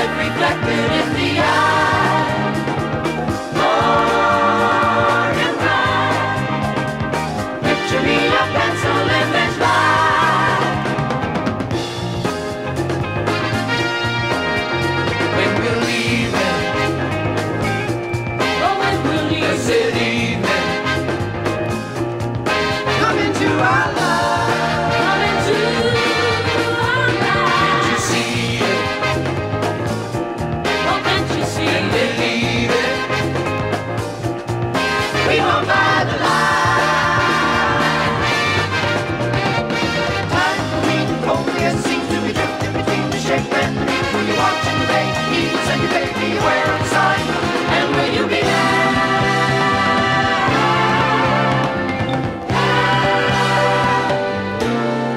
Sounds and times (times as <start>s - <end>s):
Music: 0.0s - 55.1s.